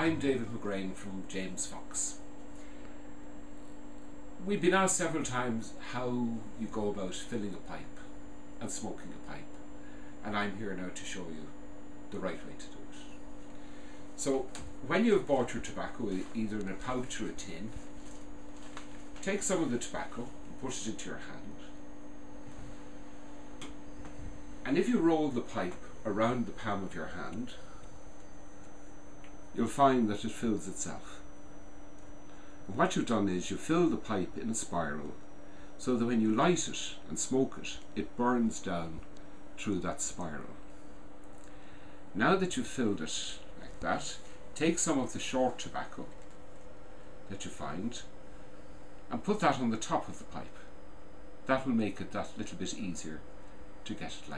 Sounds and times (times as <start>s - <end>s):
Speech: 0.0s - 2.2s, 4.4s - 9.6s, 10.2s - 13.2s, 14.2s - 17.8s, 19.2s - 21.8s, 24.6s - 27.7s, 29.6s - 31.2s, 32.6s - 35.2s, 35.8s - 40.6s, 42.2s - 46.2s, 47.3s - 48.2s, 49.1s - 50.7s, 51.4s - 53.2s, 53.8s - 54.3s.